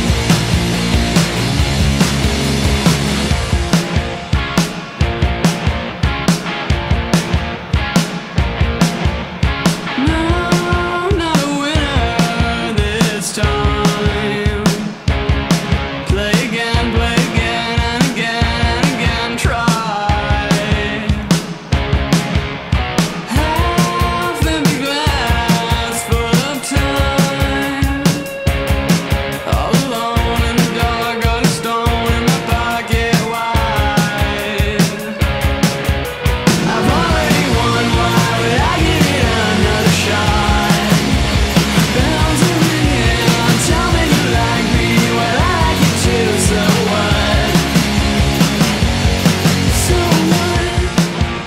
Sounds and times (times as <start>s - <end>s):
Exciting music: 0.0s - 10.3s, 34.1s - 51.4s.